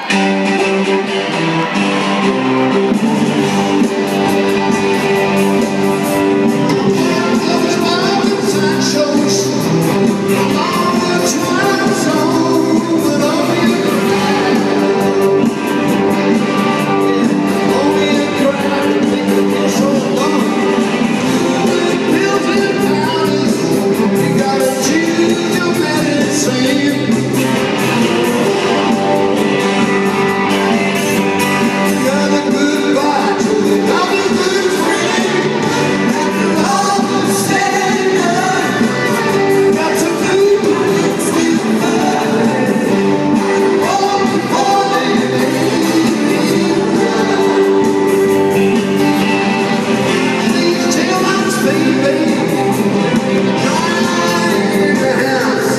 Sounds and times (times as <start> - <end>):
Music: 0.0 - 55.7.